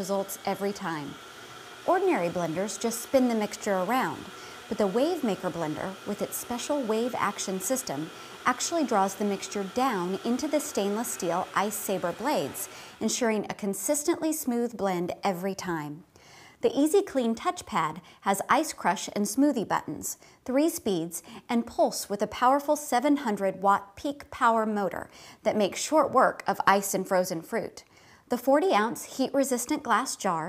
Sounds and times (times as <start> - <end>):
Speech: 0.0 - 1.2, 1.9 - 16.0, 16.6 - 30.4.